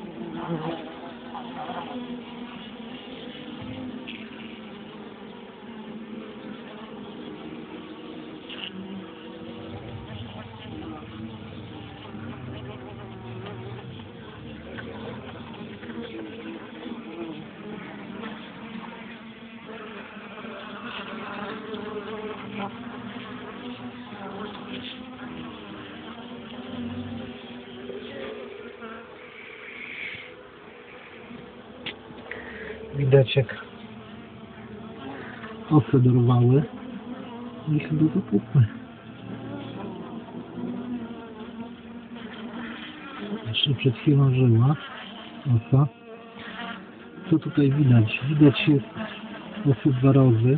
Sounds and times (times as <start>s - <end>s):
Bee, wasp, etc.: 0.0s - 50.5s
Fly, housefly: 0.0s - 50.5s.